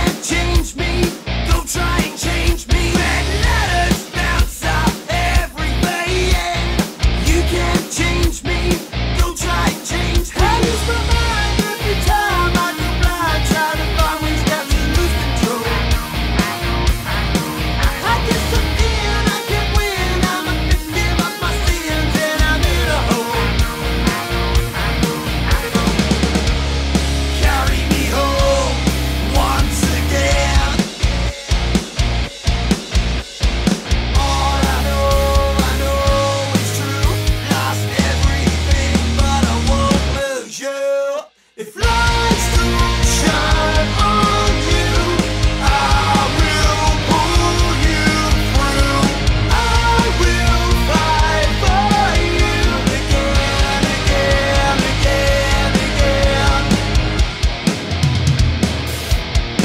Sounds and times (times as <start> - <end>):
Pop music: 0.0 - 59.6.